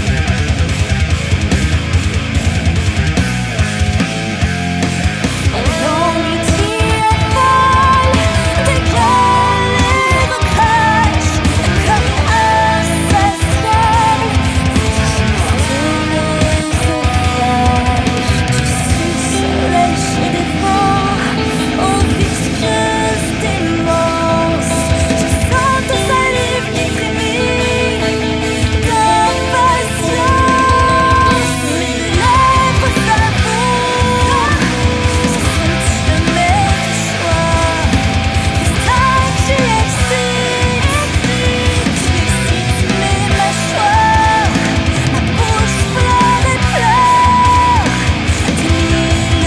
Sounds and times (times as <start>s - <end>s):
Music: 0.0s - 49.4s.